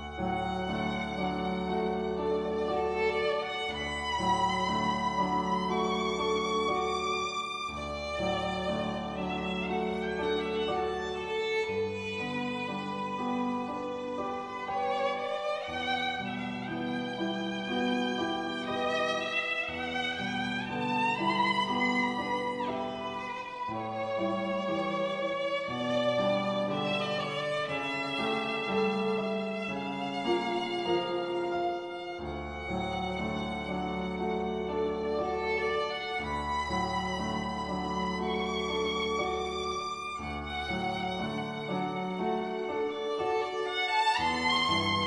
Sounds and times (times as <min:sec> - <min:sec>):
Violin, fiddle: 0:00.0 - 0:45.0.